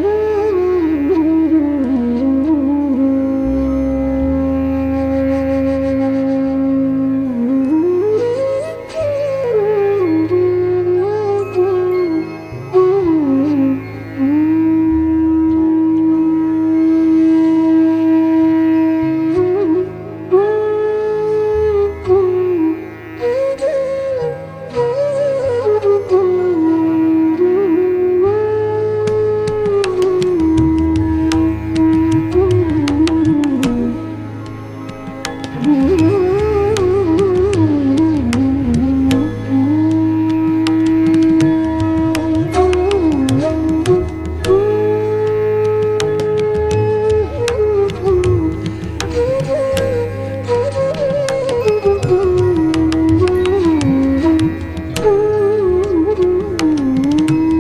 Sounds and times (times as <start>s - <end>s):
Carnatic music: 0.0s - 57.6s
Flute: 0.0s - 57.6s.